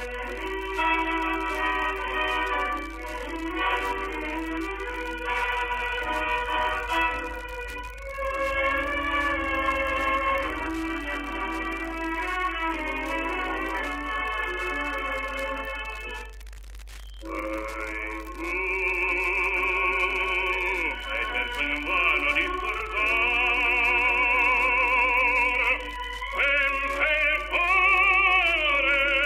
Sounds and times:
Music: 0:00.0 - 0:16.4, 0:17.2 - 0:29.2.

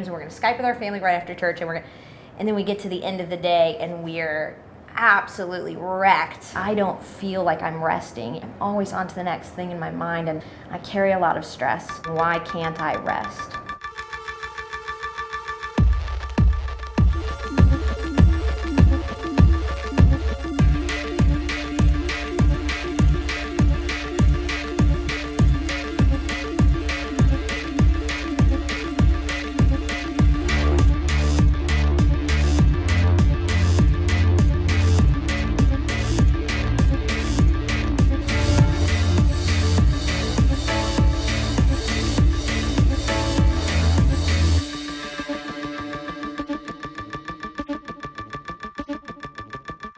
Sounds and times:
Speech: 0:00.0 - 0:13.6
Music: 0:11.1 - 0:49.9.

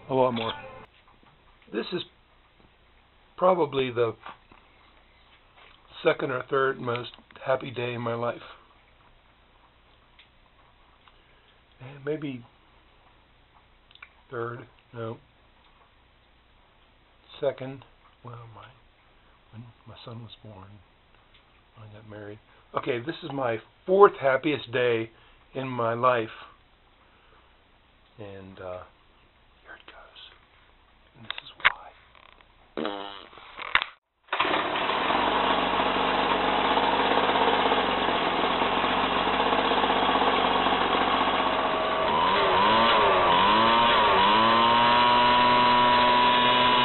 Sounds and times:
Engine starting: 0:34.3 - 0:35.8
Idling: 0:34.3 - 0:46.8.

